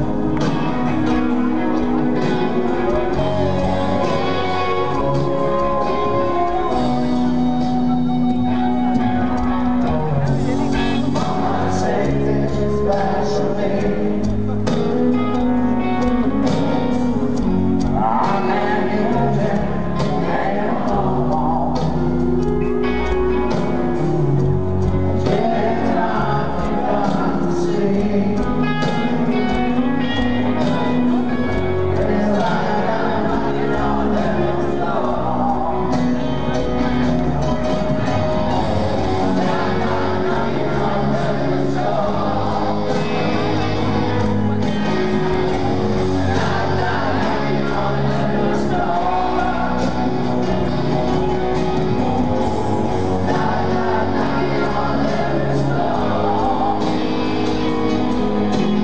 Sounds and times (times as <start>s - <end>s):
Music: 0.0s - 58.8s
Speech: 9.2s - 15.6s.